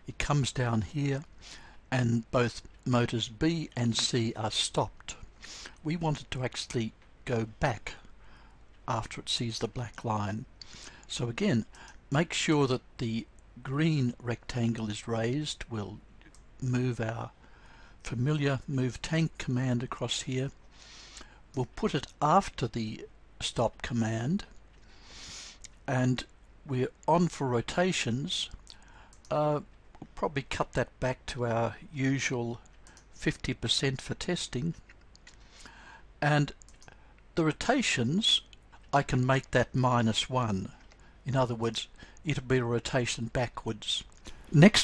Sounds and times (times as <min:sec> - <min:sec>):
Speech: 0:00.0 - 0:01.3, 0:01.9 - 0:08.1, 0:08.9 - 0:10.5, 0:11.1 - 0:16.0, 0:16.6 - 0:17.4, 0:18.0 - 0:20.6, 0:21.6 - 0:24.5, 0:25.8 - 0:28.6, 0:29.3 - 0:34.8, 0:36.2 - 0:36.6, 0:37.4 - 0:44.8.